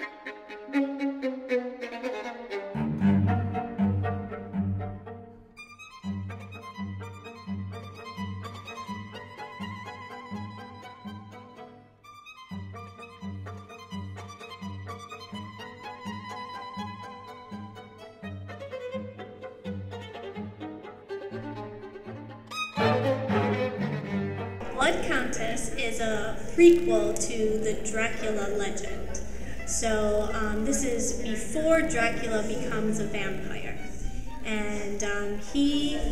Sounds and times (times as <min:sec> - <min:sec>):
Music: 0:00.0 - 0:36.1
Speech: 0:24.6 - 0:33.8, 0:34.5 - 0:36.1.